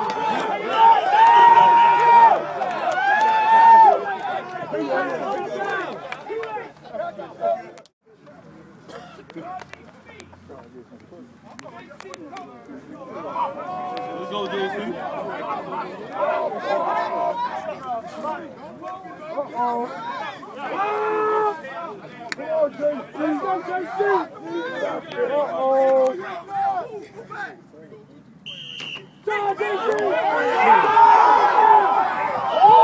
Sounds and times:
Speech: 0:04.0 - 0:28.3, 0:29.2 - 0:32.8.

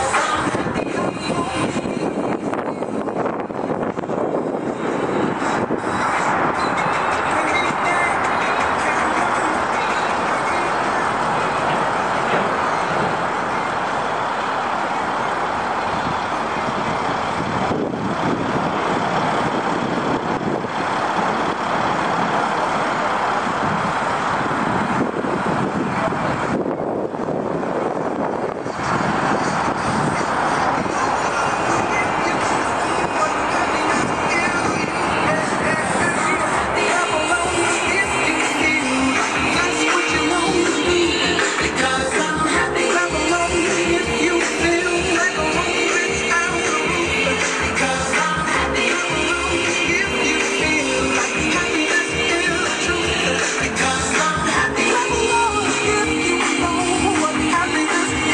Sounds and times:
Bus: 0:00.0 - 0:58.3.

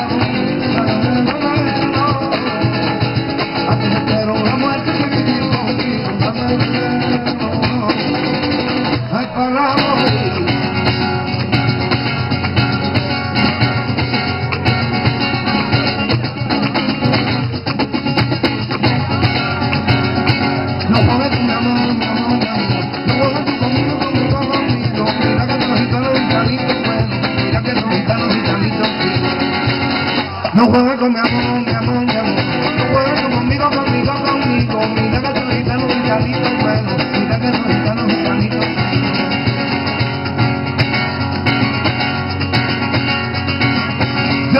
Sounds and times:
Singing: 0:00.0 - 0:10.7, 0:20.9 - 0:39.1
Flamenco: 0:00.0 - 0:44.5.

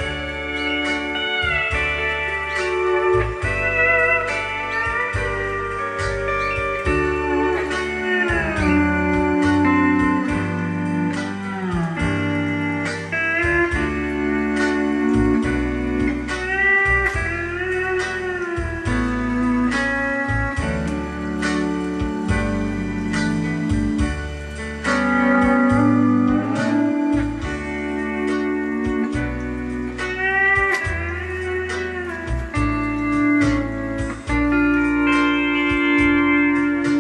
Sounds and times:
Steel guitar, slide guitar: 0:00.0 - 0:37.0.

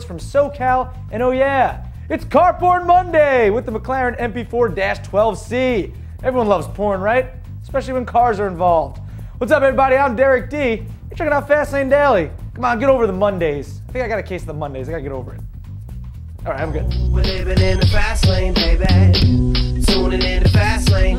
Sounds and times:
Speech: 0:00.0 - 0:15.4, 0:16.4 - 0:16.9
Music: 0:00.0 - 0:21.1.

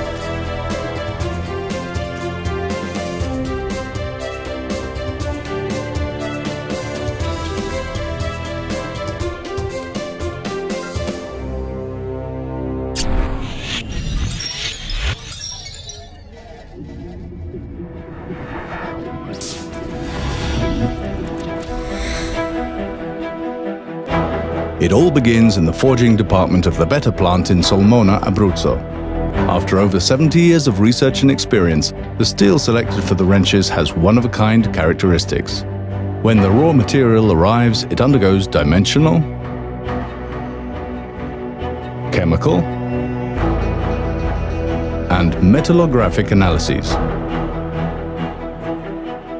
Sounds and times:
Music: 0:00.0 - 0:49.3
Speech: 0:24.8 - 0:28.8, 0:29.4 - 0:35.6, 0:36.2 - 0:39.3, 0:42.1 - 0:42.7, 0:45.1 - 0:47.0.

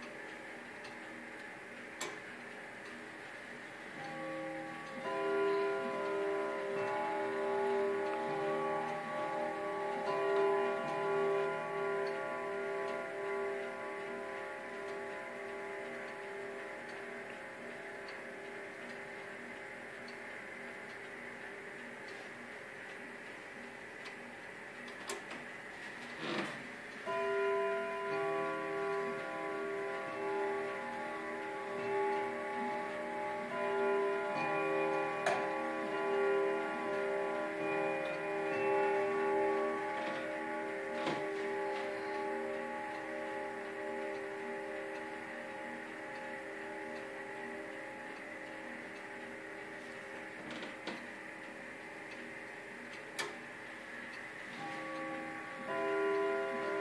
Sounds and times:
Bell: 0:04.0 - 0:19.8, 0:27.0 - 0:50.8, 0:54.5 - 0:56.8.

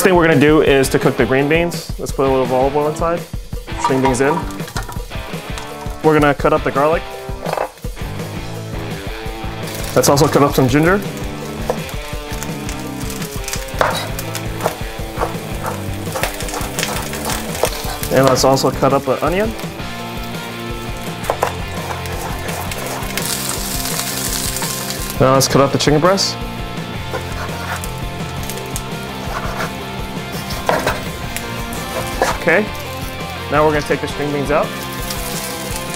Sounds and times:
Speech: 0:00.0 - 0:03.3, 0:03.9 - 0:04.5, 0:06.0 - 0:07.0, 0:10.0 - 0:11.1, 0:18.1 - 0:19.6, 0:25.2 - 0:26.4, 0:32.3 - 0:32.7, 0:33.5 - 0:34.7
Music: 0:00.0 - 0:35.9.

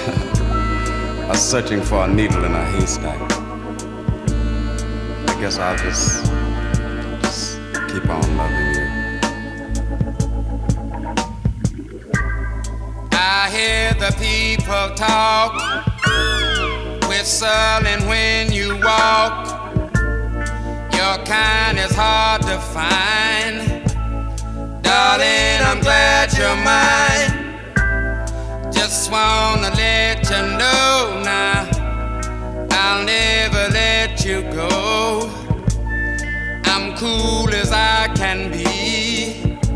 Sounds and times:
Guitar: 0:00.0 - 0:39.7.

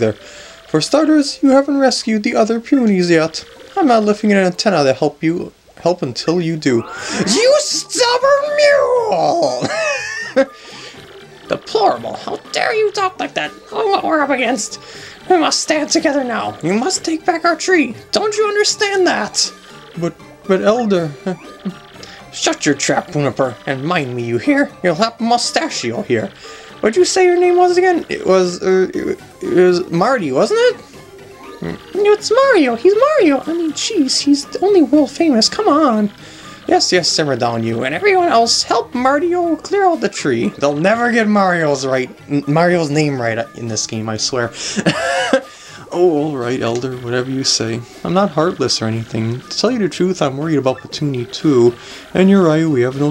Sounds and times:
Speech: 0:00.0 - 0:09.9, 0:11.5 - 0:21.5, 0:22.2 - 0:30.8, 0:31.6 - 0:44.6, 0:45.8 - 0:53.1.

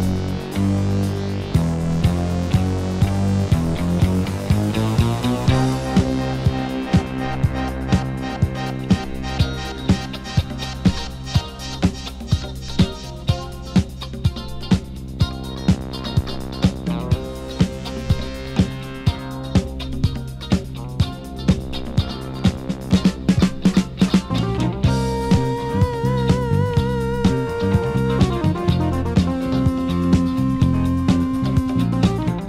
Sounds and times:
Music: 0:00.0 - 0:32.4.

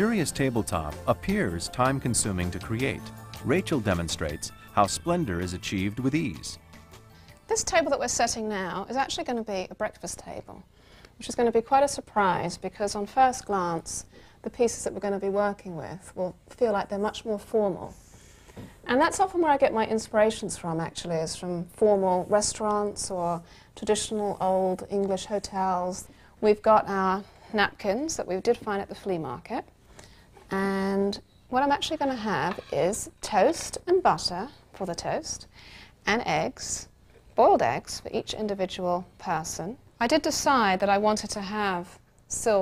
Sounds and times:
Speech: 0:00.0 - 0:06.6, 0:07.5 - 0:10.6, 0:11.2 - 0:18.0, 0:18.9 - 0:29.7, 0:30.5 - 0:35.5, 0:36.1 - 0:42.6.

